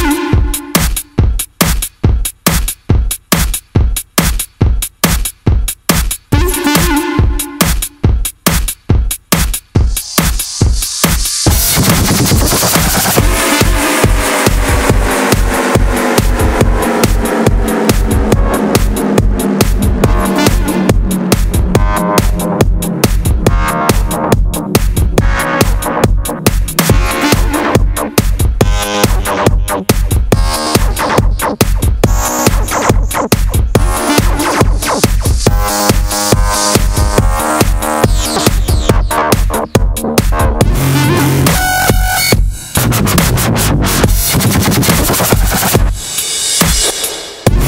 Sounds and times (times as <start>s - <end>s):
Dubstep: 0.0s - 47.6s.